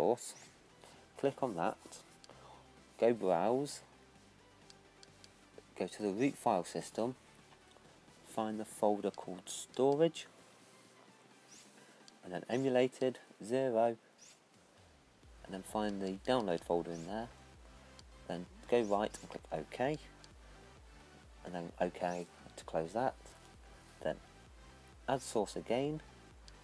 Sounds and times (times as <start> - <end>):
Speech: 0.0 - 0.4, 1.2 - 2.0, 3.0 - 3.8, 5.8 - 7.2, 8.3 - 10.3, 12.2 - 14.0, 15.5 - 17.3, 18.3 - 20.0, 21.5 - 23.2, 24.0 - 24.2, 25.1 - 26.0.